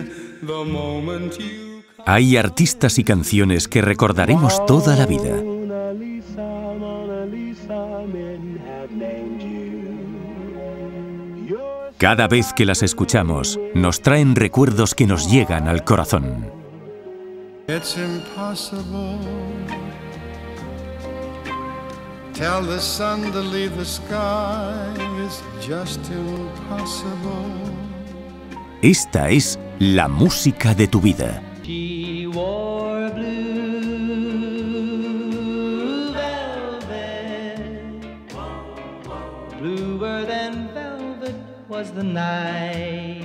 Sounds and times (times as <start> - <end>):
Sad music: 0.0 - 43.2.